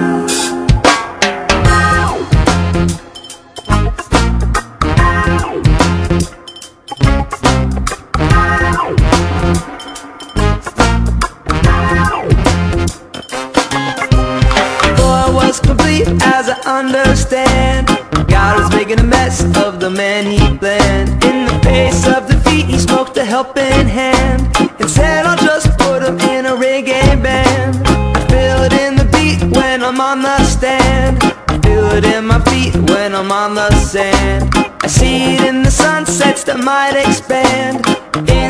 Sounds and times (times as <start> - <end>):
Music: 0.0 - 38.4.